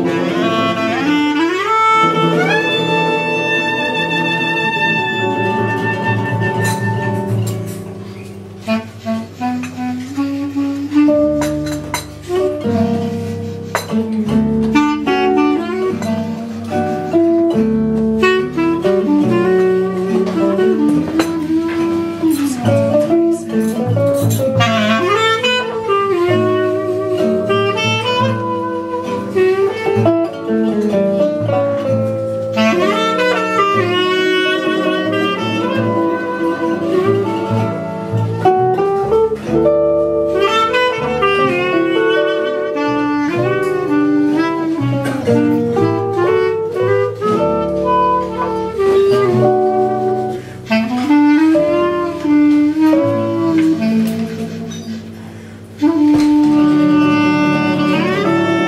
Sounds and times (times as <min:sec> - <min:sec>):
Clarinet: 0:00.0 - 0:58.6
Flamenco: 0:00.0 - 0:58.6
Guitar: 0:00.0 - 0:58.6.